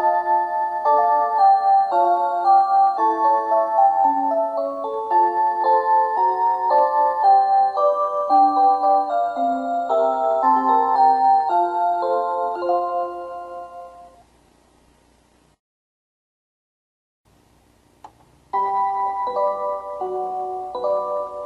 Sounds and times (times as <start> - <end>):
Music: 0.0 - 14.2, 18.5 - 21.4.